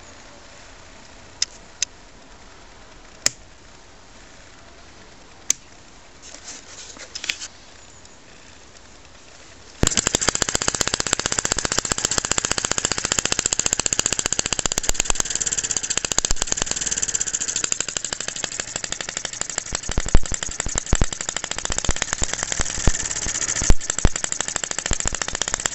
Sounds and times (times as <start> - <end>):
Idling: 9.8 - 25.7.